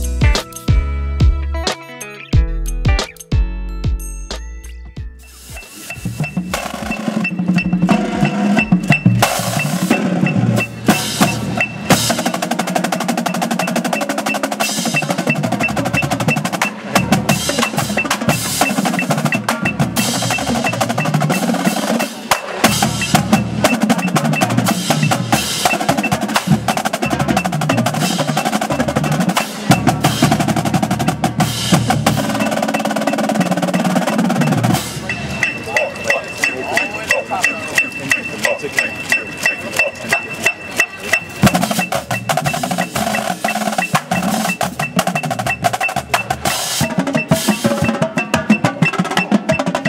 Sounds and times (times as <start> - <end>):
Music: 0.0 - 49.8.